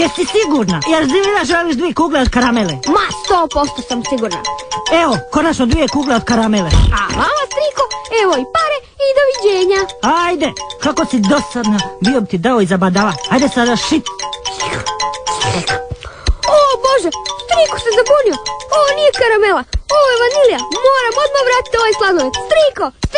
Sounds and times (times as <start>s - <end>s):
Speech: 0.0s - 14.0s, 16.5s - 23.1s
Music: 0.0s - 23.1s.